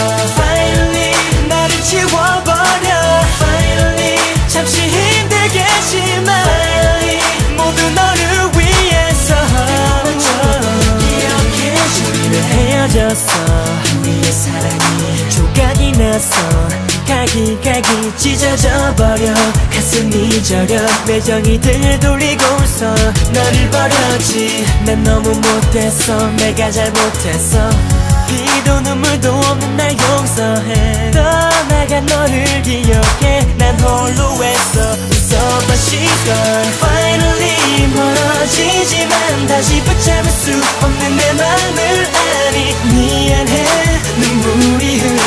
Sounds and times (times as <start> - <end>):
Music: 0.0 - 45.2
Singing: 0.0 - 45.2.